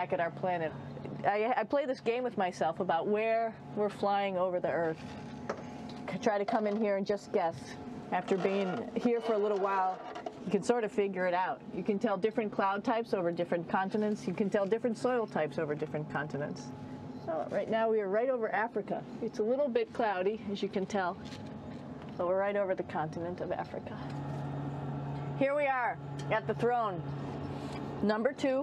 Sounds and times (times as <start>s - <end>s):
Speech: 0.0s - 5.0s, 6.1s - 21.2s, 22.2s - 24.1s, 25.4s - 27.0s, 28.0s - 28.6s.